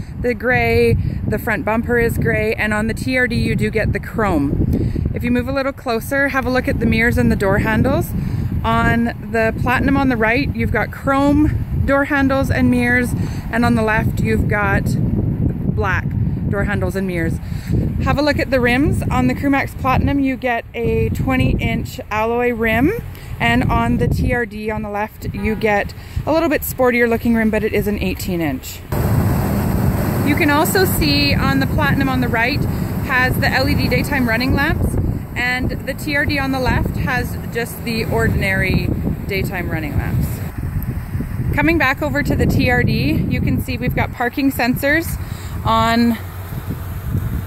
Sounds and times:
Speech: 0.2s - 4.6s, 5.2s - 8.1s, 8.7s - 15.0s, 15.8s - 17.4s, 18.0s - 28.9s, 30.3s - 40.5s, 41.6s - 46.2s.

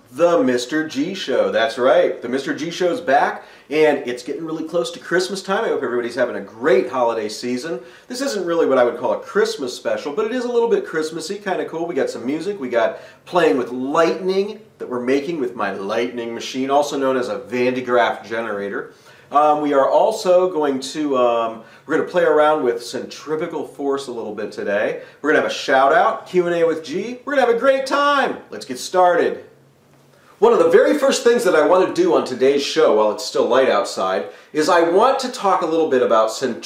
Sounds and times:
Speech: 0.0s - 29.5s, 30.4s - 36.6s.

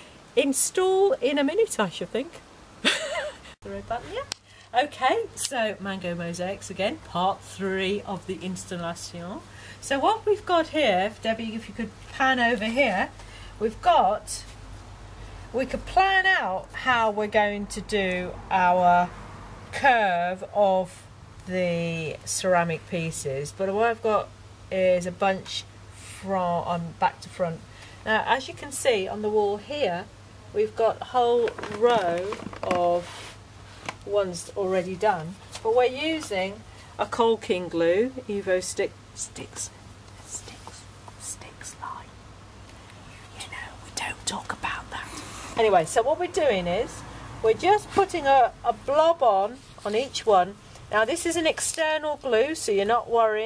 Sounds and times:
Speech: 0.4s - 2.4s, 3.6s - 14.6s, 15.6s - 19.1s, 19.7s - 33.1s, 34.0s - 42.1s, 45.6s - 53.4s
Whispering: 40.2s - 42.1s, 43.1s - 45.2s.

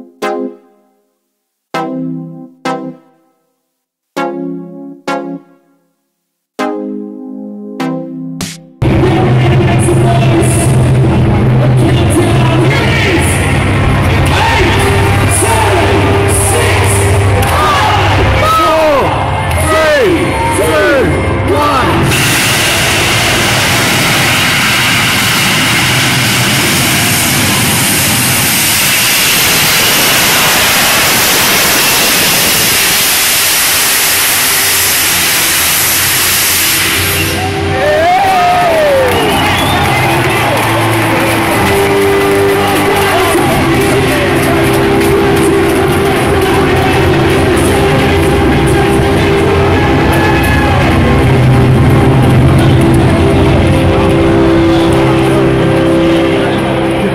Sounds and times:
Engine: 22.1s - 37.6s, 50.7s - 57.1s.

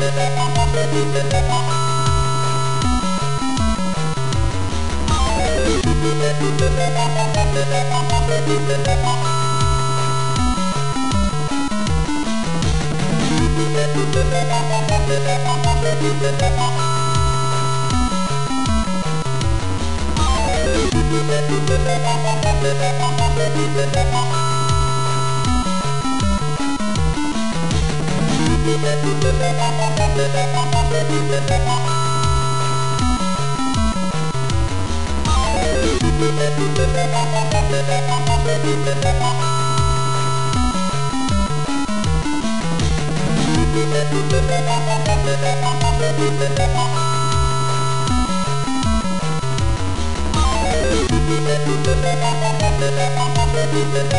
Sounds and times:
Video game music: 0.0s - 54.1s.

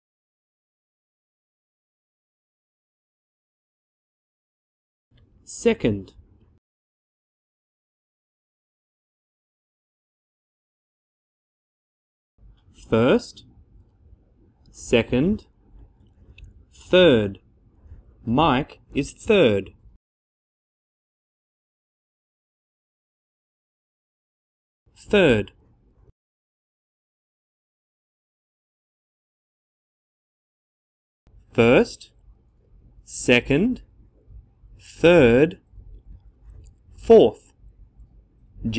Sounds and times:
Speech: 5.5s - 6.2s, 12.8s - 13.4s, 14.7s - 15.5s, 16.8s - 17.4s, 18.2s - 19.8s, 25.0s - 25.6s, 31.5s - 32.2s, 33.1s - 33.9s, 34.8s - 35.6s, 37.0s - 37.5s.

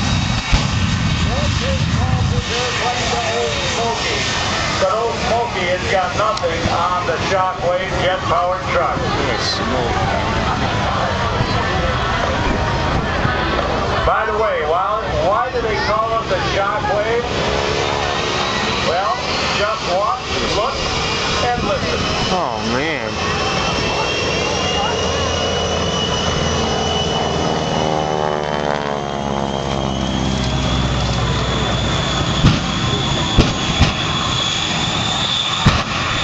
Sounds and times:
Speech: 1.3s - 12.7s, 13.8s - 17.4s, 18.7s - 25.3s
Truck: 22.2s - 36.2s.

